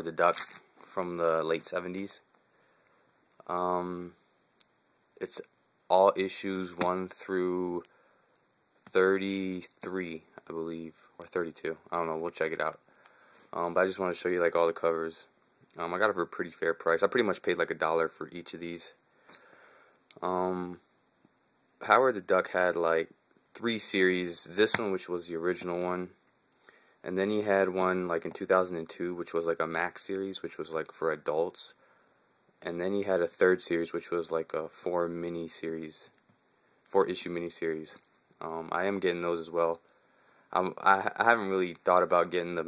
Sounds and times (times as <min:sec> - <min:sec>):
Speech: 0:00.0 - 0:02.3, 0:03.4 - 0:04.2, 0:05.2 - 0:07.9, 0:08.9 - 0:12.8, 0:13.5 - 0:19.0, 0:20.1 - 0:20.8, 0:21.8 - 0:26.2, 0:27.0 - 0:31.8, 0:32.6 - 0:36.2, 0:36.9 - 0:39.8, 0:40.5 - 0:42.6.